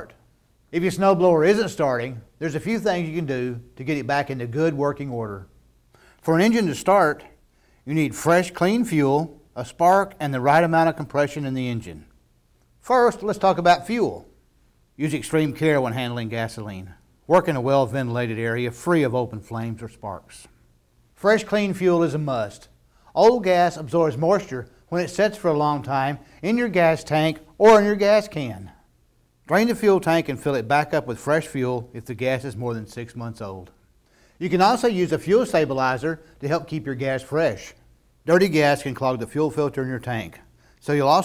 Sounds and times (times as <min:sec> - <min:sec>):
Speech: 0:00.0 - 0:05.6, 0:06.2 - 0:12.1, 0:12.8 - 0:14.4, 0:15.0 - 0:20.6, 0:21.2 - 0:28.8, 0:29.5 - 0:33.8, 0:34.4 - 0:41.2.